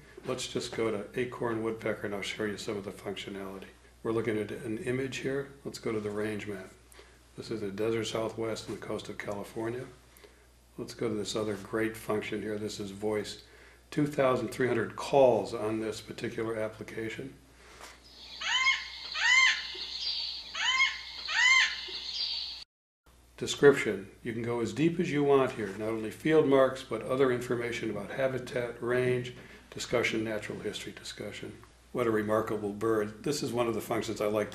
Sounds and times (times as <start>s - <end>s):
Speech: 0.2s - 6.8s, 7.4s - 10.0s, 10.8s - 17.4s, 23.4s - 34.5s
Chirp, tweet: 18.1s - 22.6s.